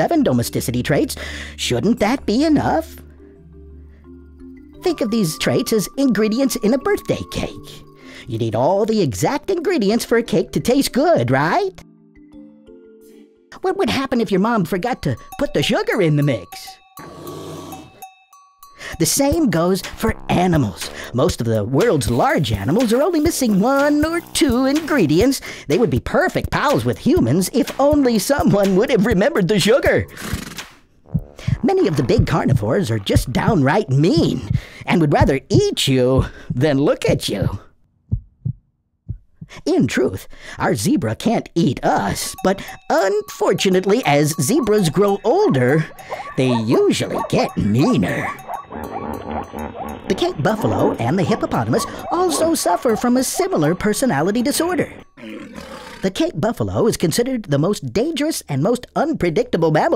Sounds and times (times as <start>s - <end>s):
Speech: 0.0s - 3.0s, 4.8s - 11.8s, 13.6s - 16.8s, 18.9s - 30.1s, 31.5s - 37.7s, 39.6s - 48.4s, 50.1s - 55.0s, 56.0s - 59.9s
Music: 0.0s - 36.5s, 41.6s - 55.2s
Wild animals: 17.0s - 18.0s, 46.0s - 54.0s, 54.9s - 56.2s.